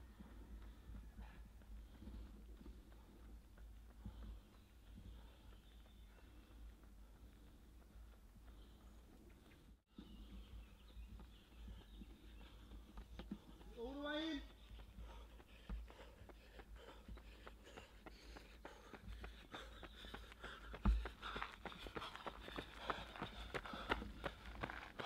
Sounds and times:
Run: 0:00.0 - 0:25.0
Speech: 0:13.7 - 0:14.6.

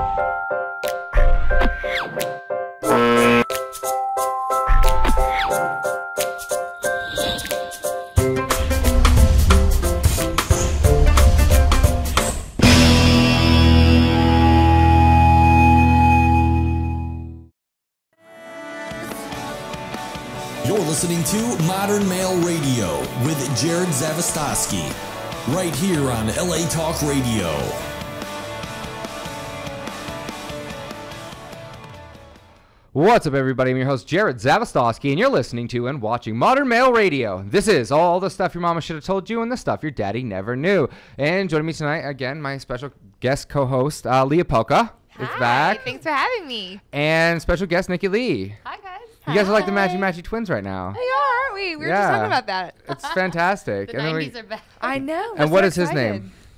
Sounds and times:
Music: 0:00.0 - 0:17.5, 0:18.2 - 0:32.8
Speech: 0:20.6 - 0:27.8, 0:33.0 - 0:56.3.

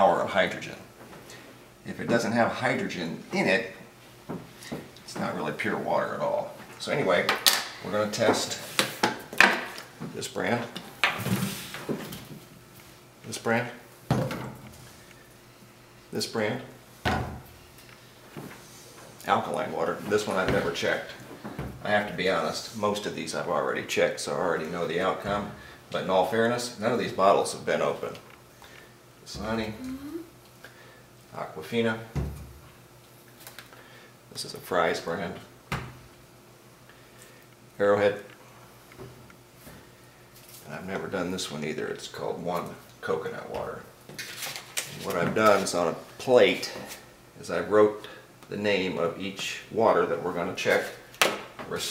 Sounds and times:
Speech: 0:00.0 - 0:00.9, 0:01.8 - 0:03.8, 0:05.1 - 0:08.7, 0:10.1 - 0:10.8, 0:13.2 - 0:13.8, 0:16.1 - 0:16.8, 0:19.2 - 0:21.2, 0:21.8 - 0:28.2, 0:31.3 - 0:32.2, 0:34.3 - 0:35.5, 0:37.8 - 0:38.3, 0:40.6 - 0:43.9, 0:44.9 - 0:51.0, 0:51.6 - 0:51.9
Inside, small room: 0:00.0 - 0:51.9.

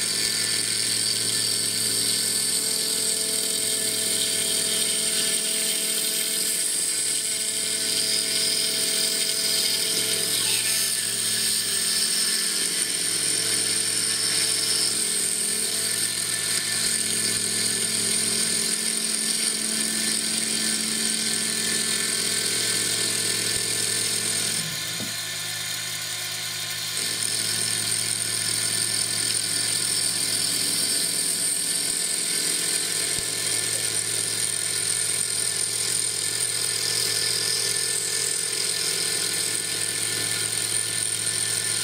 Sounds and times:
Tools: 0:00.0 - 0:41.8.

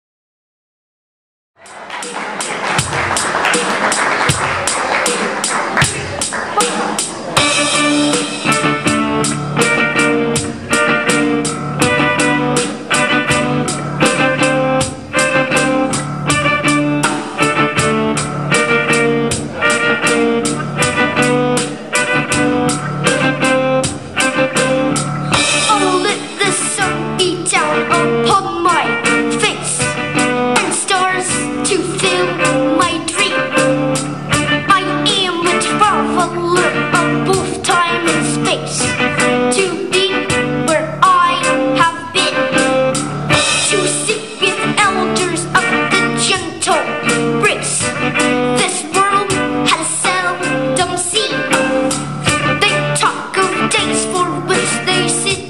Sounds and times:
Music: 0:01.6 - 0:55.5.

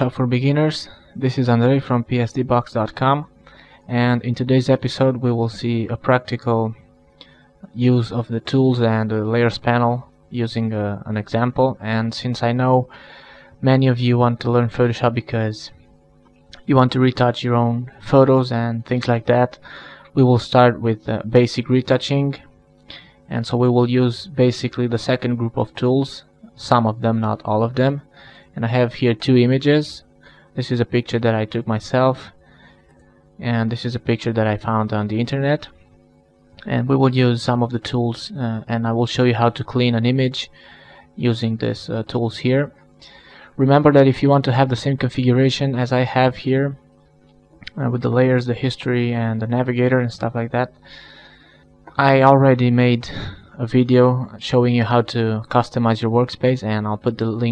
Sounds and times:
Speech: 0:00.0 - 0:03.3, 0:03.9 - 0:06.8, 0:07.7 - 0:12.9, 0:13.6 - 0:15.8, 0:16.6 - 0:22.5, 0:23.3 - 0:32.4, 0:33.4 - 0:35.8, 0:36.6 - 0:40.6, 0:41.2 - 0:42.8, 0:43.6 - 0:46.8, 0:47.6 - 0:50.8, 0:51.9 - 0:57.5.

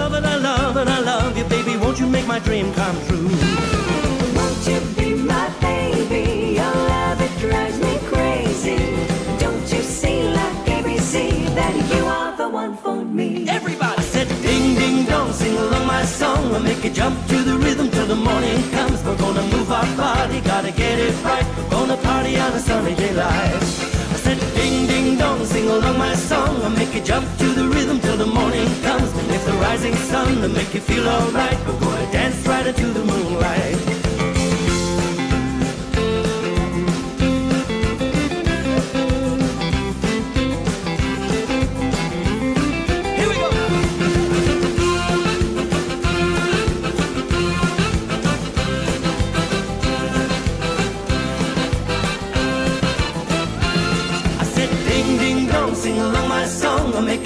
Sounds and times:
Music: 0:00.0 - 0:57.2.

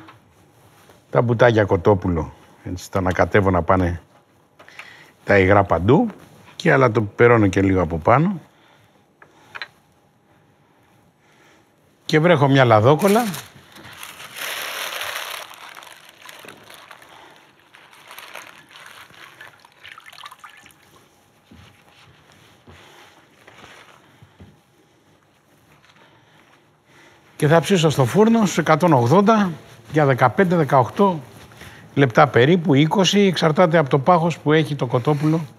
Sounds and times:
Speech: 0:01.1 - 0:04.1, 0:05.2 - 0:08.5, 0:12.1 - 0:13.5, 0:27.4 - 0:31.3, 0:32.0 - 0:35.5
Liquid: 0:18.1 - 0:21.1.

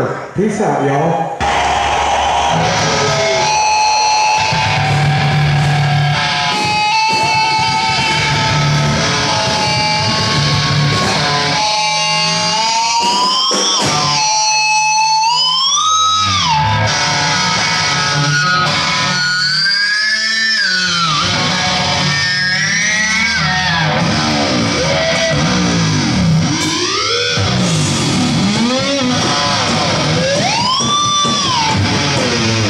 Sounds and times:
Music: 0:01.4 - 0:32.6.

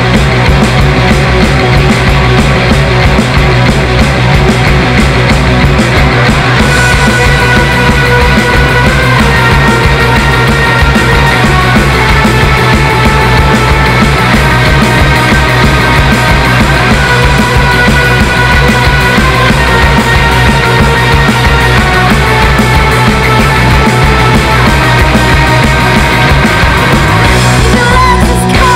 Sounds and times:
Music: 0:00.0 - 0:28.7.

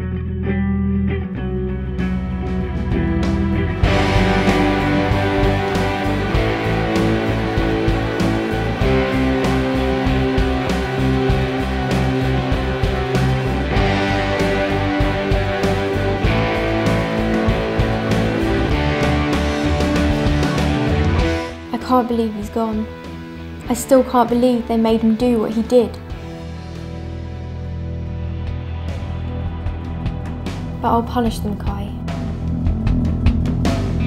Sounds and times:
Music: 0:00.0 - 0:34.0.

